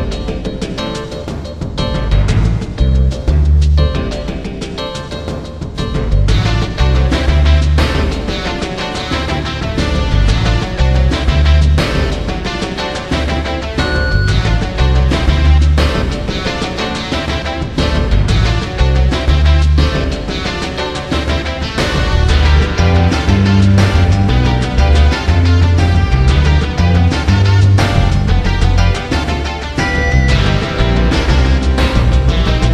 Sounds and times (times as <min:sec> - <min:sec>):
Music: 0:00.0 - 0:32.7.